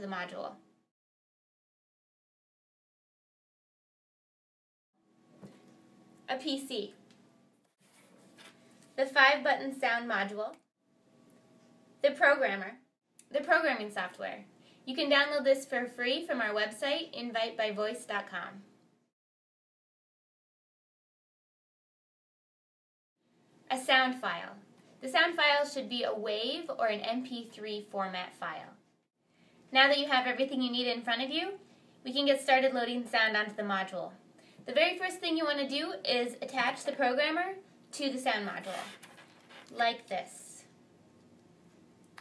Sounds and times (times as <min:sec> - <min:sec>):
Speech: 0:00.0 - 0:00.6, 0:06.3 - 0:07.0, 0:09.0 - 0:10.6, 0:12.0 - 0:18.7, 0:23.7 - 0:28.8, 0:29.7 - 0:39.0, 0:39.7 - 0:40.8.